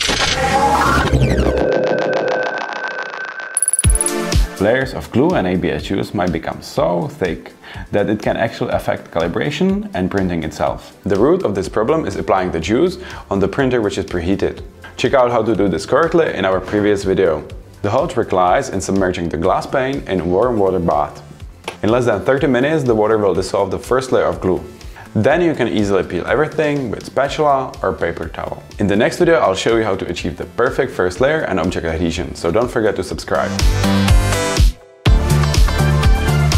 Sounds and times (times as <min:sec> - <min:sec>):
Music: 0:00.0 - 0:36.5
Speech: 0:04.6 - 0:33.6.